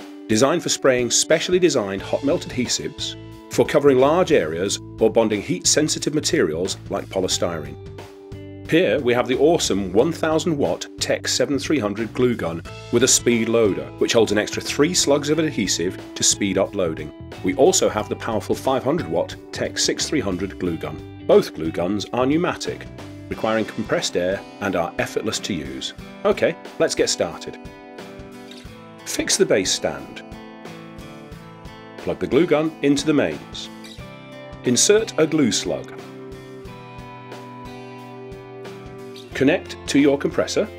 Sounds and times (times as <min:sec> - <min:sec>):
Music: 0:00.0 - 0:40.7
Speech: 0:00.3 - 0:07.8, 0:08.7 - 0:27.6, 0:29.0 - 0:30.2, 0:32.0 - 0:33.7, 0:34.6 - 0:36.0, 0:39.3 - 0:40.7.